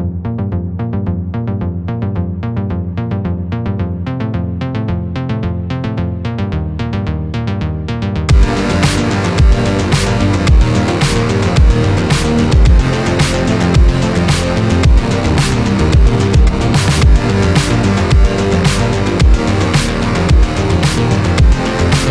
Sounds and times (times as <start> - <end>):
Music: 0.0 - 22.1.